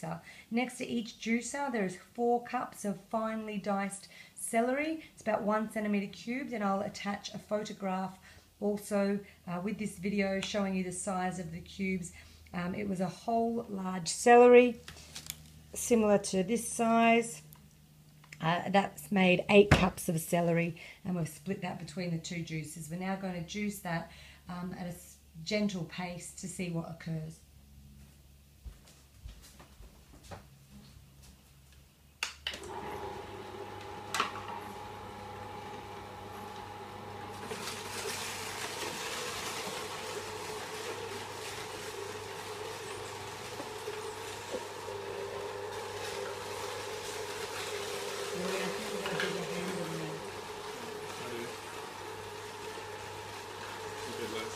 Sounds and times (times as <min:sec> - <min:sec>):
Speech: 0:00.0 - 0:14.8, 0:15.8 - 0:17.4, 0:18.4 - 0:27.4, 0:48.3 - 0:51.6, 0:54.0 - 0:54.5.